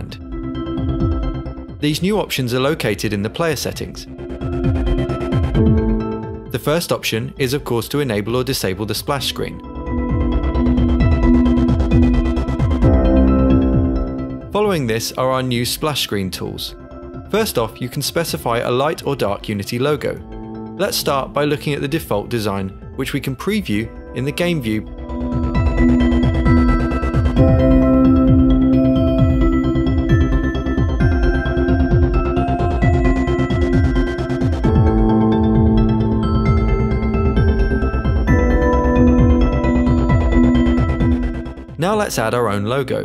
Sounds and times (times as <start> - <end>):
Speech: 0.0 - 0.2, 1.8 - 4.1, 6.5 - 9.6, 14.5 - 20.2, 20.8 - 24.9, 41.8 - 43.0
Music: 0.0 - 43.0.